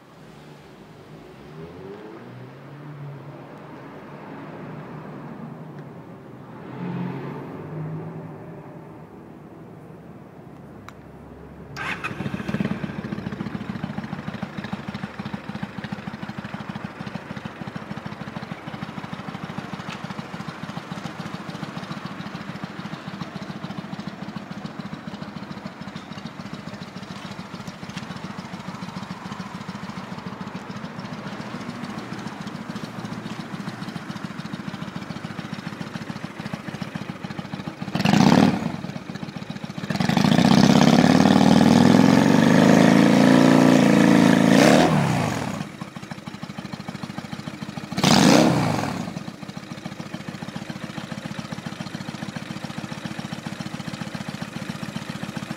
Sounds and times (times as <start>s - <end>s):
Vehicle: 0.0s - 55.5s
Idling: 11.8s - 42.1s, 44.0s - 55.5s.